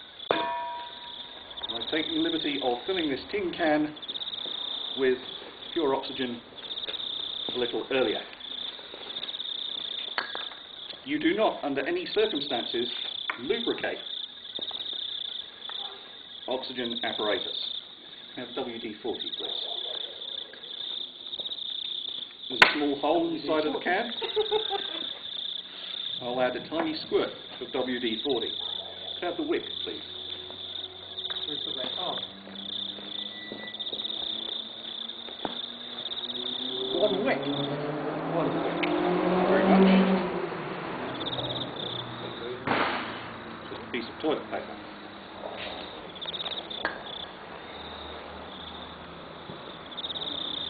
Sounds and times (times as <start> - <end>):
Cricket: 0.0 - 50.6.